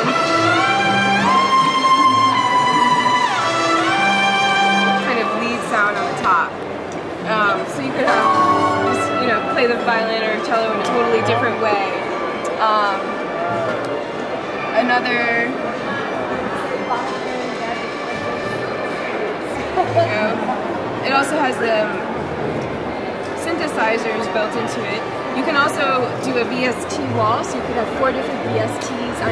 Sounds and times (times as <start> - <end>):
Violin, fiddle: 0.0 - 6.4
Speech: 5.0 - 6.6, 7.2 - 8.3, 8.9 - 13.7, 21.0 - 22.1, 23.4 - 29.3.